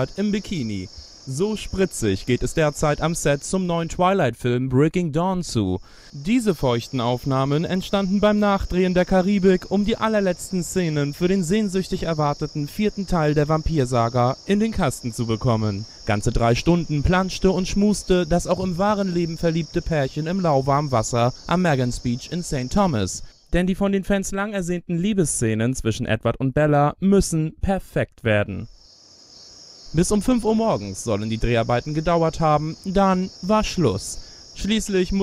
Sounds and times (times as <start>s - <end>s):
Speech: 0.0s - 28.7s, 30.0s - 35.2s.